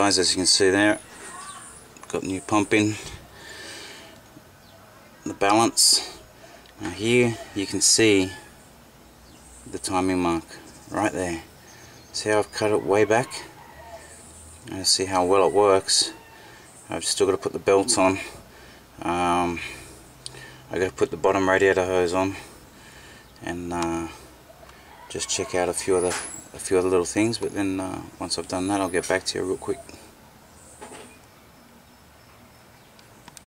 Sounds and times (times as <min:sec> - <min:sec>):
Speech: 0:00.0 - 0:03.2, 0:05.2 - 0:06.2, 0:06.8 - 0:08.4, 0:09.7 - 0:11.5, 0:12.2 - 0:13.5, 0:14.7 - 0:16.2, 0:16.9 - 0:18.4, 0:19.0 - 0:19.7, 0:20.7 - 0:22.5, 0:23.4 - 0:24.2, 0:25.1 - 0:30.0.